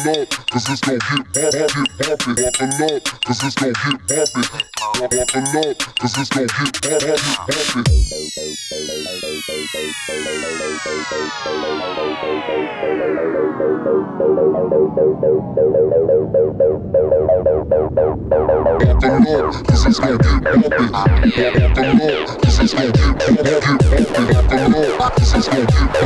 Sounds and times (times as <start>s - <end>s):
Dubstep: 0.0s - 15.1s, 18.7s - 26.0s.